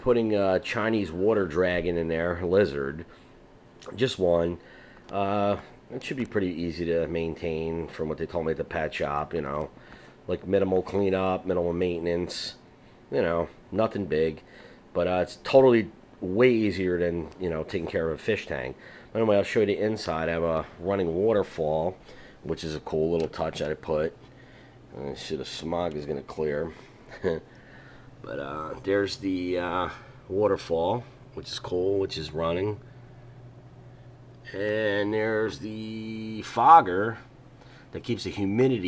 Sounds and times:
Speech: 0:00.0 - 0:03.1, 0:03.8 - 0:09.7, 0:10.3 - 0:24.2, 0:24.9 - 0:27.5, 0:28.2 - 0:32.8, 0:34.4 - 0:37.3, 0:37.9 - 0:38.8.

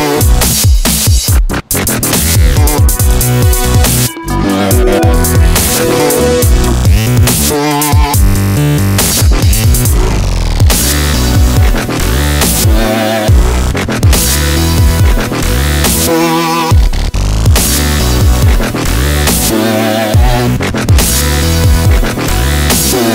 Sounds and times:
Dubstep: 0:00.0 - 0:23.1.

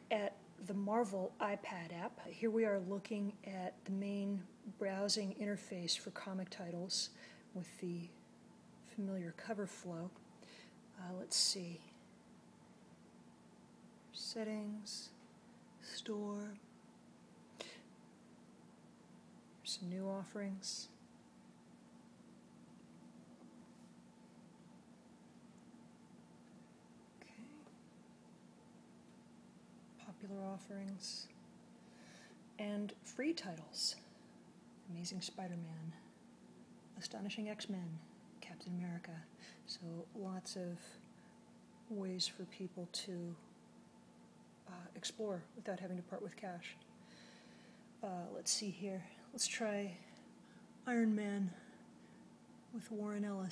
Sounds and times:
Speech: 0:00.1 - 0:08.2, 0:08.9 - 0:10.2, 0:11.0 - 0:12.0, 0:14.2 - 0:15.2, 0:15.8 - 0:16.6, 0:19.6 - 0:21.0, 0:30.0 - 0:31.4, 0:32.6 - 0:34.1, 0:34.9 - 0:36.1, 0:37.0 - 0:41.0, 0:41.9 - 0:43.4, 0:44.7 - 0:46.8, 0:48.0 - 0:50.2, 0:50.9 - 0:51.7, 0:52.7 - 0:53.5.

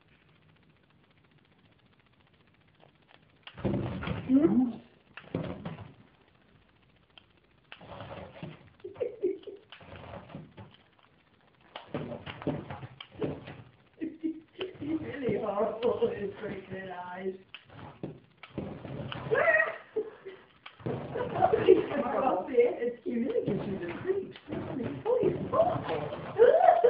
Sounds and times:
Speech: 0:04.3 - 0:04.9, 0:14.8 - 0:17.4, 0:21.5 - 0:26.8.

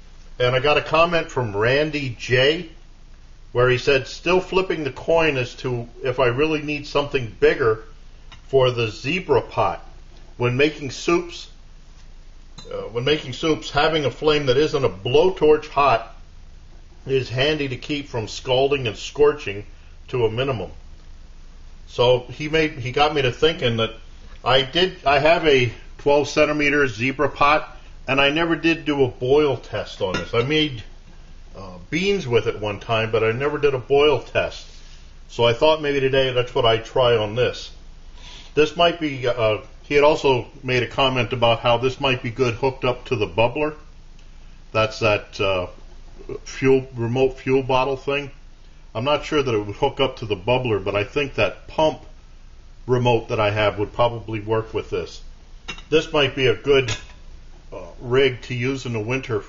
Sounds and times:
Speech: 0:00.4 - 0:02.8, 0:03.6 - 0:07.9, 0:08.5 - 0:11.6, 0:12.6 - 0:16.2, 0:17.1 - 0:20.8, 0:21.9 - 0:30.9, 0:31.6 - 0:34.7, 0:35.3 - 0:37.8, 0:38.6 - 0:43.9, 0:44.8 - 0:52.2, 0:52.9 - 0:55.3, 0:55.9 - 0:57.0, 0:57.7 - 0:59.4.

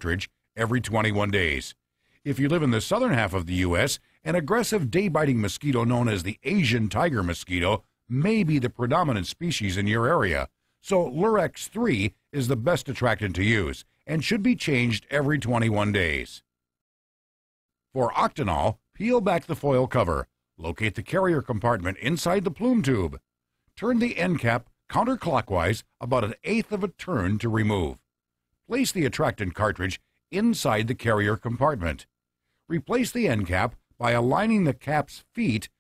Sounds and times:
Speech: 0:00.0 - 0:16.5, 0:17.9 - 0:23.2, 0:23.8 - 0:28.0, 0:28.7 - 0:32.1, 0:32.7 - 0:35.8.

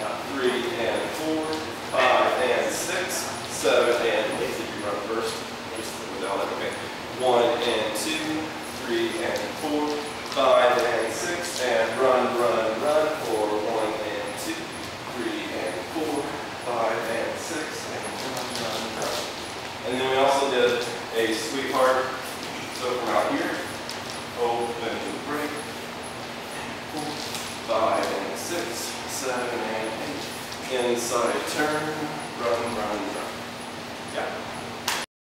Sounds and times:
Speech: 0:00.0 - 0:23.8, 0:24.4 - 0:25.7, 0:26.9 - 0:33.4, 0:34.1 - 0:34.5.

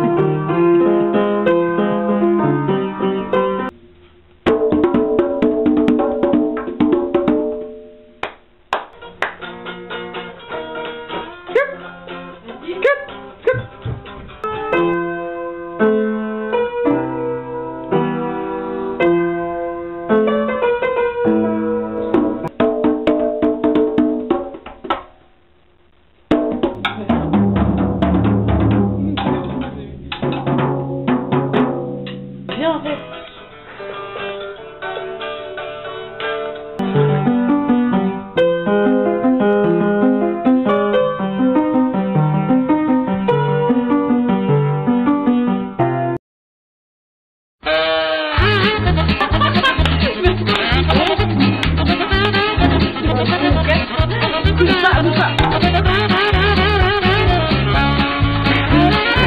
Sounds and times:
Speech: 0:12.4 - 0:13.1, 0:29.0 - 0:30.1, 0:32.5 - 0:33.1, 0:53.4 - 0:55.4.

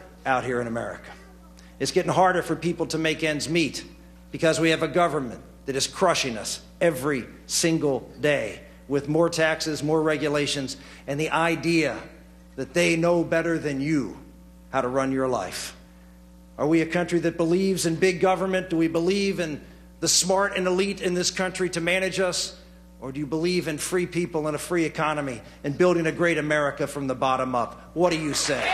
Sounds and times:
Male speech, man speaking: 0:00.0 - 0:01.2, 0:01.8 - 0:15.8, 0:16.6 - 0:28.7
Narration, monologue: 0:00.0 - 0:28.7.

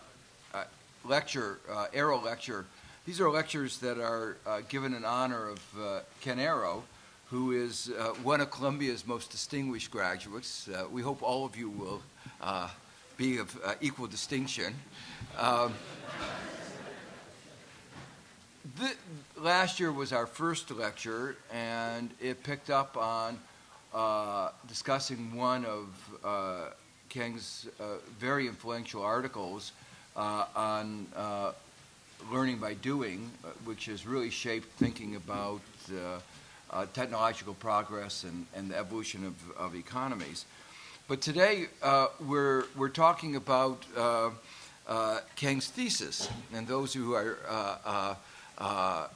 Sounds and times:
Speech: 0:00.0 - 0:16.9, 0:18.7 - 0:31.6, 0:32.2 - 0:40.5, 0:41.1 - 0:49.1.

